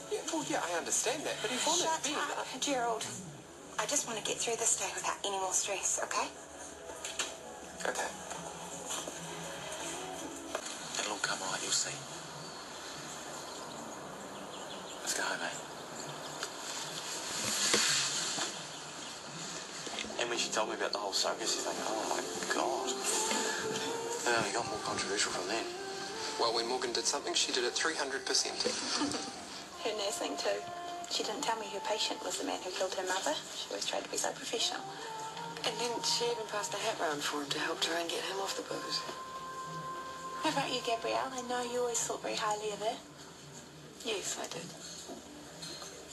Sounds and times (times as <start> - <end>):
Music: 0.0 - 46.1.